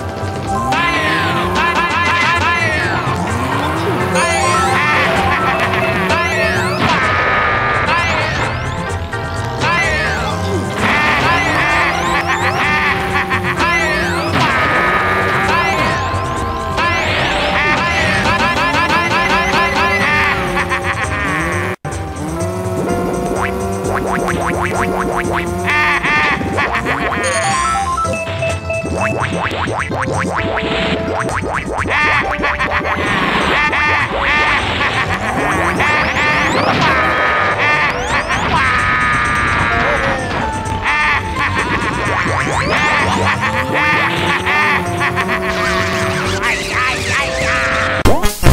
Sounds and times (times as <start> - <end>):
Music: 0.0 - 48.5.